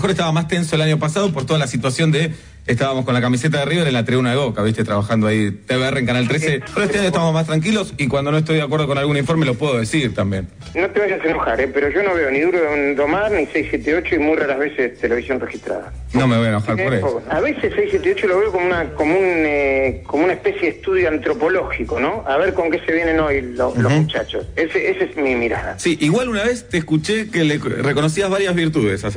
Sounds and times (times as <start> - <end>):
Music: 0.0 - 29.1
Speech: 0.0 - 29.1
Radio: 6.1 - 7.7, 10.3 - 25.8.